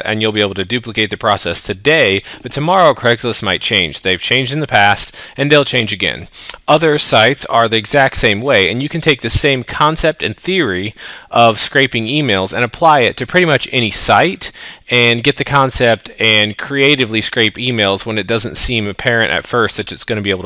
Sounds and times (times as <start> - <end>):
Speech: 0.0 - 20.4.